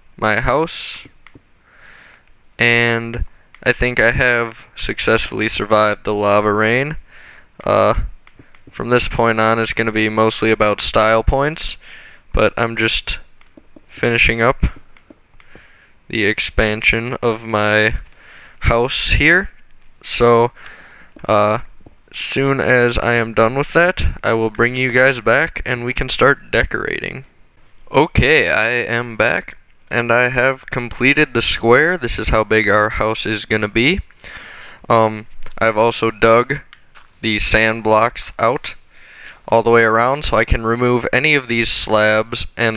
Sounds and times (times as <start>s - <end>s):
Speech: 0.2s - 1.2s, 2.6s - 7.0s, 7.6s - 8.1s, 8.7s - 13.3s, 13.9s - 14.8s, 16.1s - 20.6s, 21.2s - 27.3s, 27.9s - 34.1s, 34.9s - 38.8s, 39.4s - 42.7s.